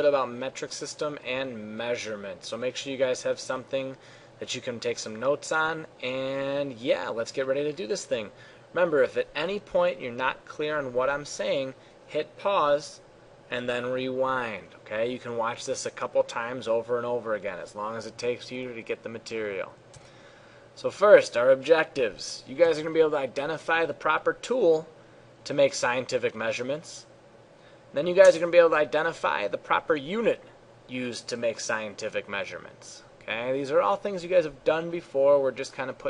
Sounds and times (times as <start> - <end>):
Speech: 0.0 - 19.8, 20.8 - 27.1, 28.0 - 36.0.